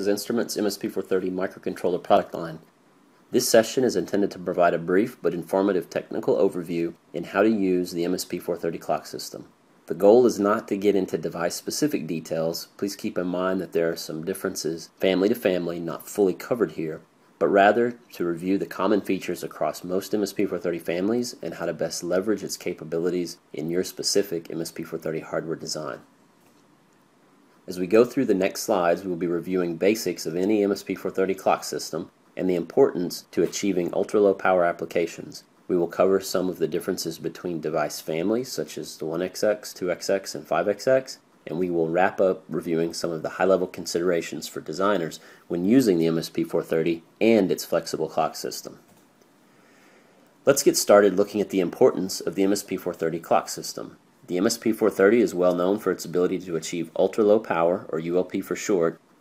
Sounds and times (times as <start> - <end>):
Speech: 0.0 - 2.7, 3.3 - 26.1, 27.7 - 48.9, 50.4 - 59.0.